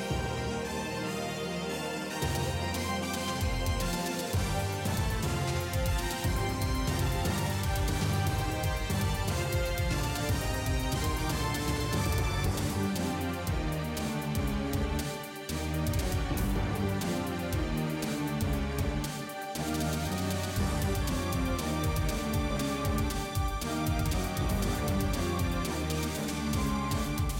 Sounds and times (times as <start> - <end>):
Music: 0.0 - 27.3.